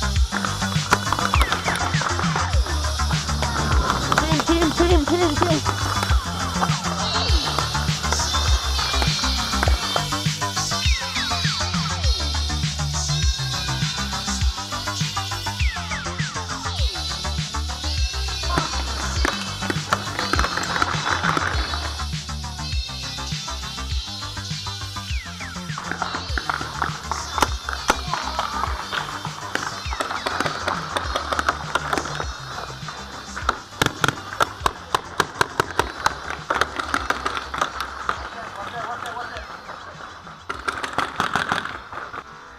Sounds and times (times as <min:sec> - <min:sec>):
Firecracker: 0:00.0 - 0:42.5
Music: 0:00.0 - 0:42.5
Speech: 0:04.0 - 0:05.8, 0:38.2 - 0:40.1.